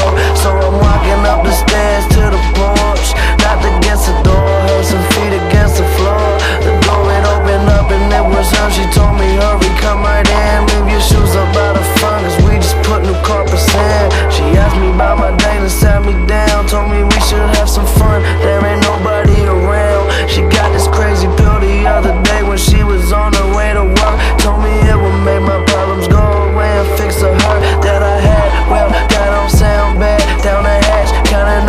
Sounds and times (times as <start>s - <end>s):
Music: 0.0s - 31.6s.